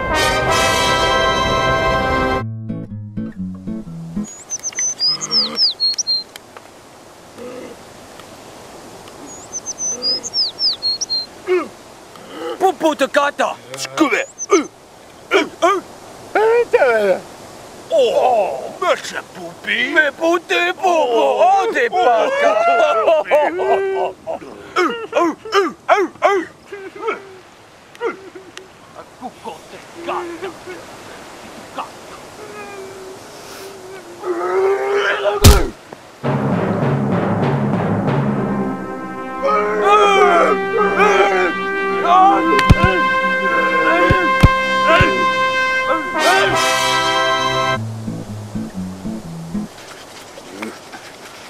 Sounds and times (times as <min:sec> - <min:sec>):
Timpani: 0:00.0 - 0:02.4, 0:36.2 - 0:49.8
Outside, rural or natural: 0:00.0 - 0:51.5.